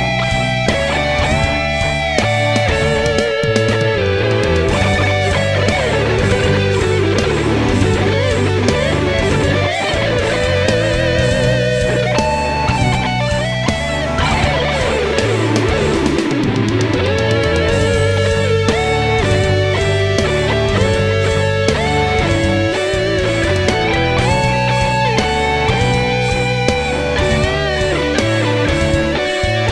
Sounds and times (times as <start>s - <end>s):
Electric guitar: 0.0s - 29.7s.